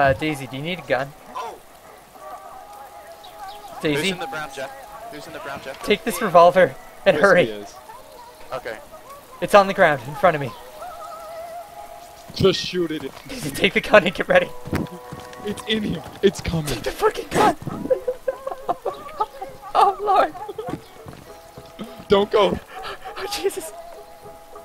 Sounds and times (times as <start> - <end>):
Speech: 3.8 - 7.8, 15.5 - 17.6.